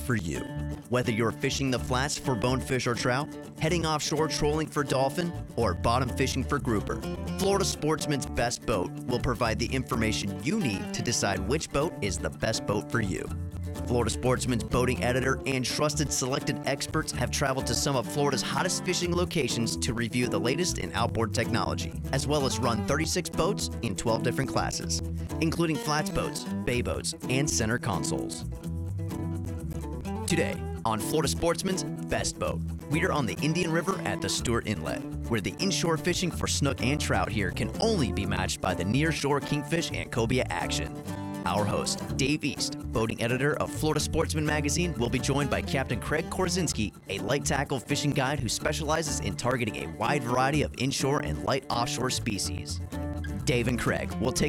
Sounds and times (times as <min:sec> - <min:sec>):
Speech: 0:00.0 - 0:28.4, 0:30.3 - 0:52.8, 0:53.4 - 0:54.4
Music: 0:00.0 - 0:54.4.